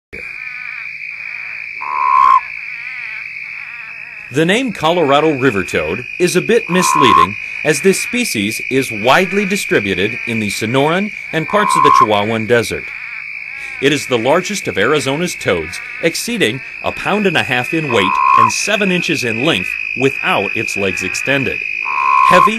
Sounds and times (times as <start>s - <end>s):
Frog: 0.2s - 22.5s
Speech: 4.3s - 12.9s, 13.8s - 21.6s, 22.3s - 22.5s.